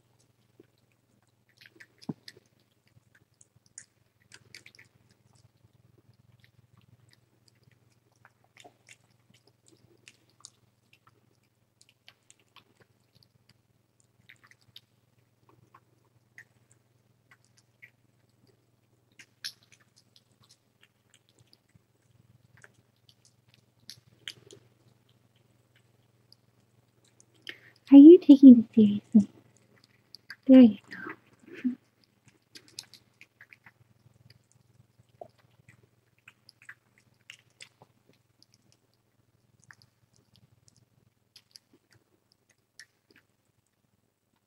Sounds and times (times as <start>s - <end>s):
Cat: 0.0s - 27.9s, 29.0s - 43.8s
Chewing, mastication: 0.0s - 27.9s, 29.0s - 44.4s.